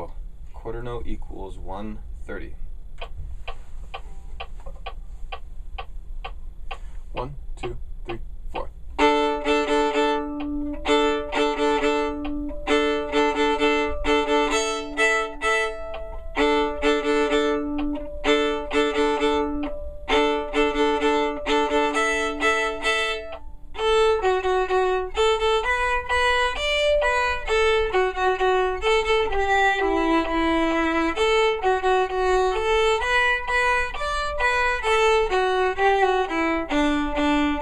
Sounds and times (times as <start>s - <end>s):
Violin, fiddle: 9.0s - 37.6s.